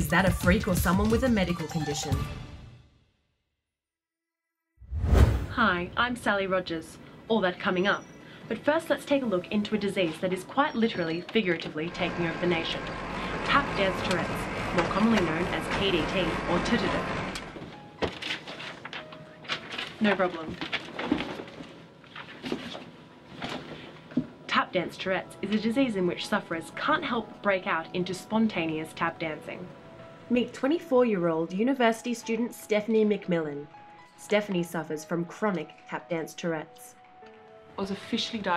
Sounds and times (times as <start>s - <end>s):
Speech: 0.0s - 2.2s, 5.5s - 12.8s, 13.5s - 17.1s, 20.0s - 20.6s, 24.5s - 29.7s, 30.3s - 37.0s, 37.8s - 38.5s
Music: 0.0s - 3.4s, 7.6s - 21.2s, 24.5s - 38.5s.